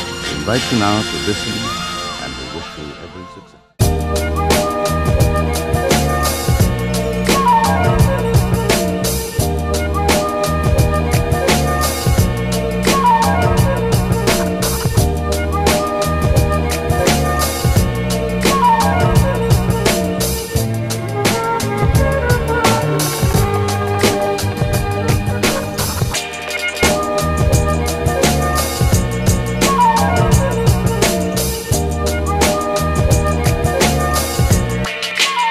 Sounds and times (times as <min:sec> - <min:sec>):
Funk: 0:03.8 - 0:35.4.